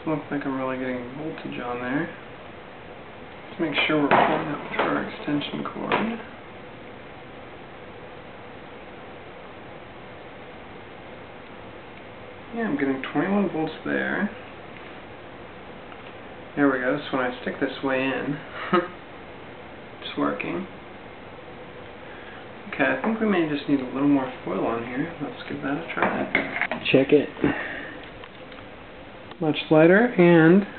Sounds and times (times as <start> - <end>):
Speech: 0.0 - 2.2, 3.5 - 6.3, 12.5 - 14.4, 16.6 - 18.5, 20.0 - 20.7, 22.7 - 27.5, 29.4 - 30.7.